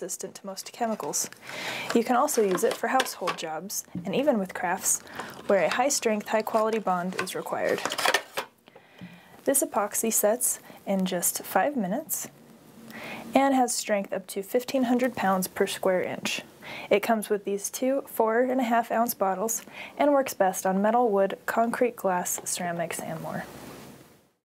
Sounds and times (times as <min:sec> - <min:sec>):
Speech: 0:00.0 - 0:01.3, 0:01.9 - 0:07.9, 0:09.5 - 0:12.3, 0:13.3 - 0:23.5.